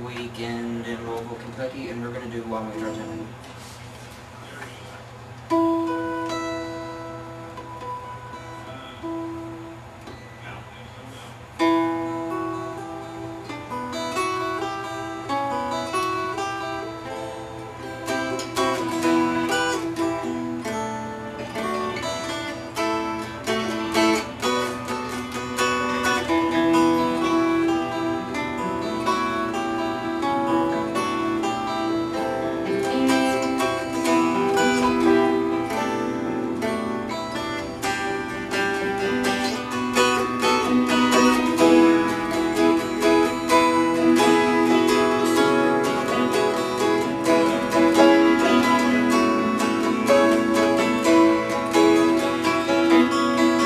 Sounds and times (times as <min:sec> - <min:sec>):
Strum: 0:00.0 - 0:53.6.